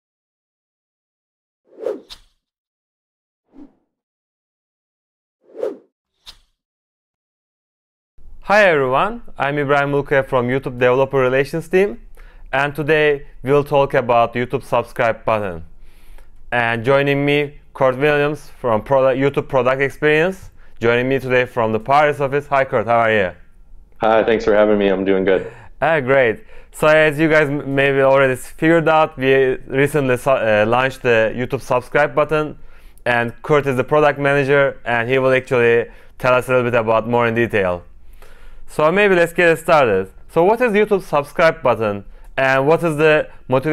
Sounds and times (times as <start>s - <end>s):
Speech: 8.5s - 15.7s, 16.5s - 23.4s, 24.0s - 37.9s, 38.7s - 43.7s.